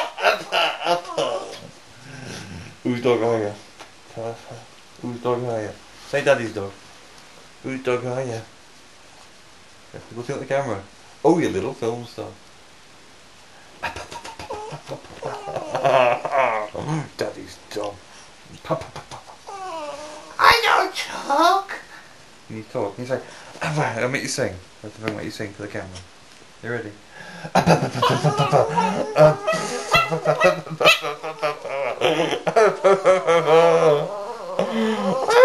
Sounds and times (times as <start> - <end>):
Speech: 9.9 - 12.4, 20.4 - 21.8, 22.5 - 27.0.